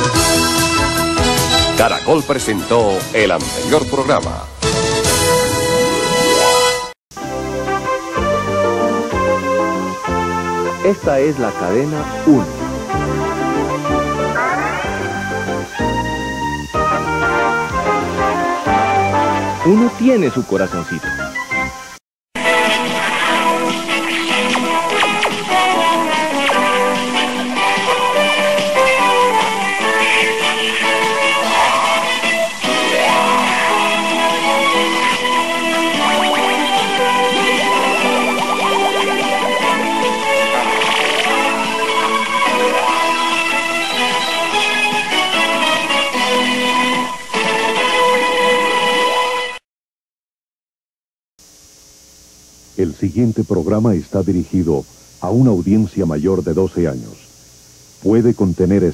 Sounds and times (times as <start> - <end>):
Music: 0.0 - 49.6
Speech: 1.8 - 4.5, 10.8 - 12.5, 19.6 - 21.1, 52.8 - 57.3, 58.0 - 58.9.